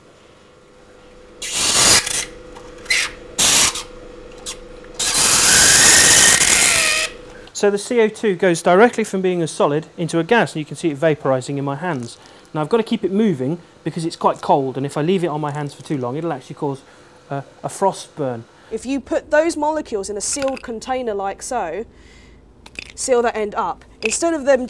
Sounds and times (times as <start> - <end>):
Speech: 7.6 - 21.9, 23.0 - 24.6.